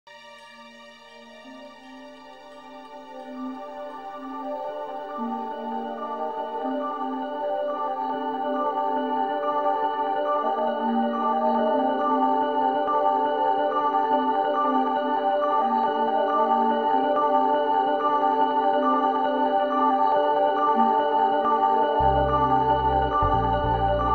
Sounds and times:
Ambient music: 0.1 - 24.1.

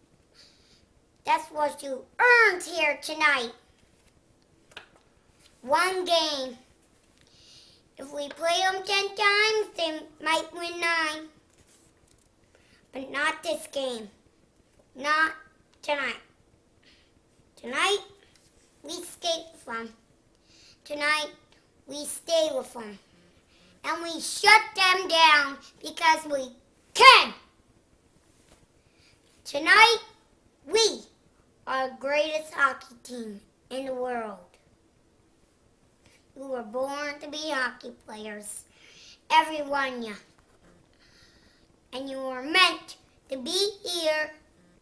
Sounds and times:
Narration, monologue: 0.0 - 44.8
Child speech, kid speaking: 1.2 - 3.6, 5.6 - 6.7, 8.0 - 11.4, 12.9 - 14.2, 15.0 - 16.4, 17.6 - 18.2, 18.8 - 20.0, 20.8 - 23.1, 23.8 - 27.5, 29.4 - 34.6, 36.4 - 38.7, 39.3 - 40.3, 41.9 - 44.5.

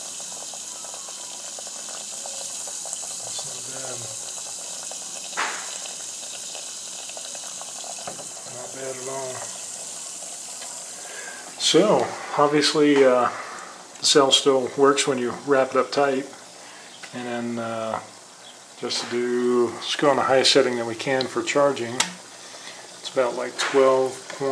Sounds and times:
Water: 0.0 - 16.6
Gush: 0.0 - 24.5
Speech: 3.2 - 4.2, 8.5 - 9.5, 11.6 - 13.4, 14.0 - 16.4, 17.1 - 18.1, 18.8 - 22.2, 23.0 - 24.5.

